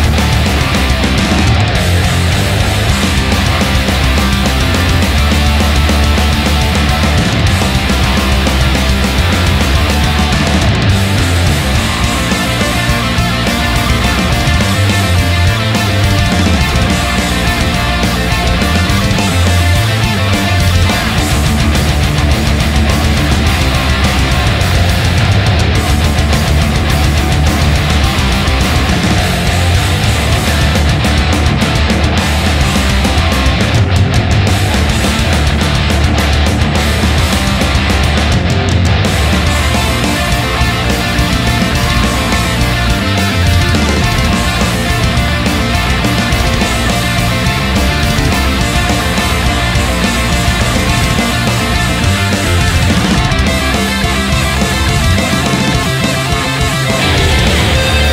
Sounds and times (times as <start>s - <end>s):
Music: 0.0s - 58.1s.